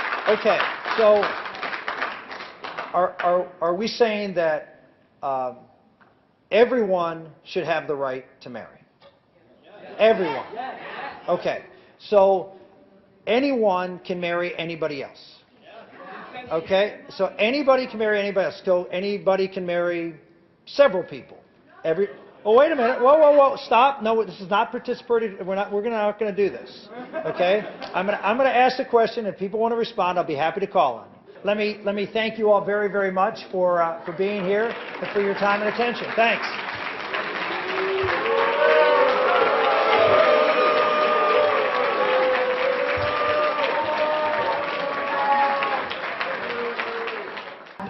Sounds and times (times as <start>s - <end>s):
Narration, monologue: 0.0s - 36.8s.